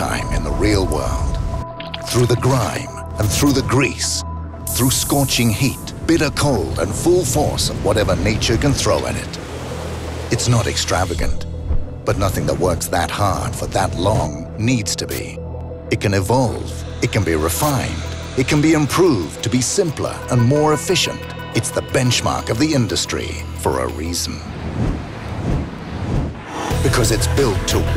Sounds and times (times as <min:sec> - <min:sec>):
Speech: 0:00.0 - 0:01.3, 0:02.1 - 0:09.4, 0:10.4 - 0:11.4, 0:12.1 - 0:24.5, 0:26.8 - 0:27.9
Music: 0:00.0 - 0:24.4, 0:26.4 - 0:27.9.